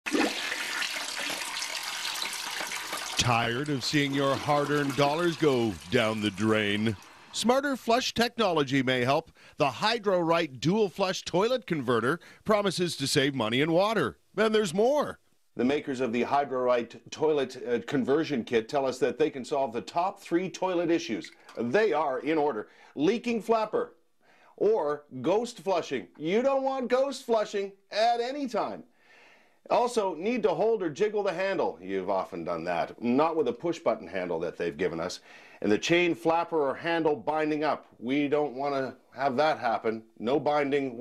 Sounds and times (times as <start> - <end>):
Toilet flush: 0.0 - 7.5
Speech: 3.2 - 24.0, 24.6 - 28.9, 29.7 - 41.0.